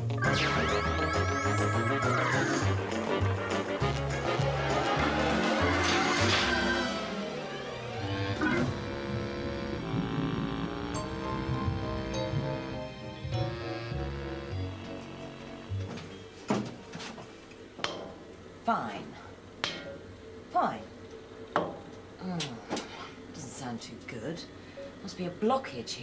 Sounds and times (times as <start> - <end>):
Speech: 23.4 - 26.0.